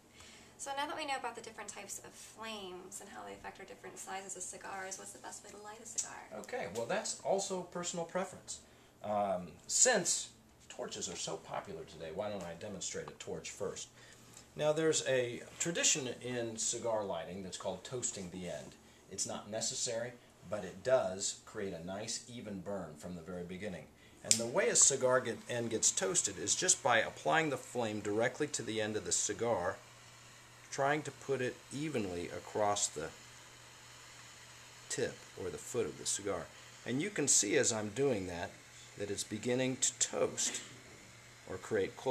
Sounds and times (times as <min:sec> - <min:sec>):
Speech: 0:00.6 - 0:13.9, 0:14.6 - 0:29.8, 0:30.7 - 0:33.2, 0:34.9 - 0:40.7, 0:41.5 - 0:42.1.